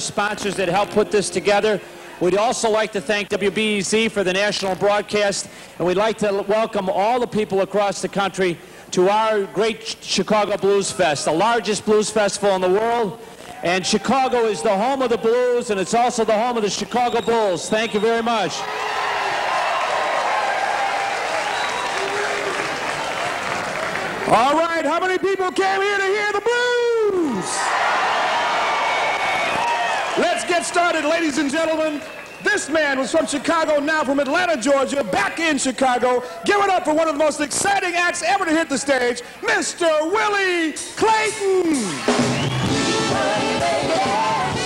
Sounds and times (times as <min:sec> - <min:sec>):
Speech: 0:00.0 - 0:18.6, 0:24.3 - 0:27.7, 0:30.2 - 0:42.0.